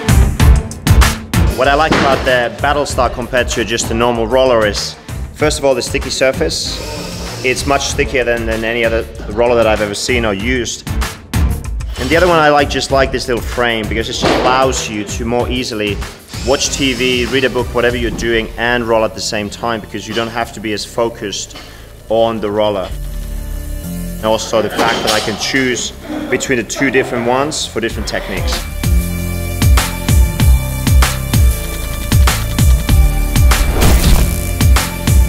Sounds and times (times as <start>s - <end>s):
Music: 0.0s - 35.2s
Speech: 1.5s - 6.8s, 7.4s - 10.8s, 12.0s - 23.0s, 24.2s - 28.7s.